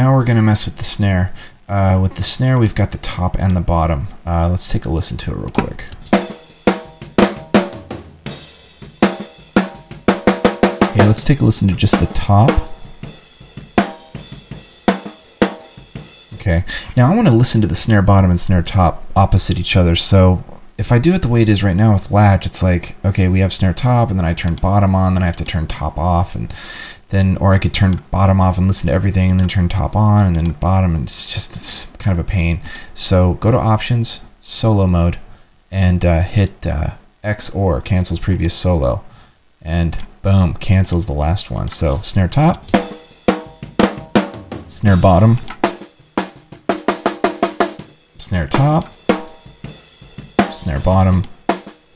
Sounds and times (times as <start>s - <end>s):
Speech: 0.0s - 6.0s, 10.9s - 12.7s, 16.4s - 42.7s, 44.7s - 45.5s, 48.2s - 48.9s, 50.5s - 51.3s
Snare drum: 6.1s - 16.1s, 42.7s - 51.8s.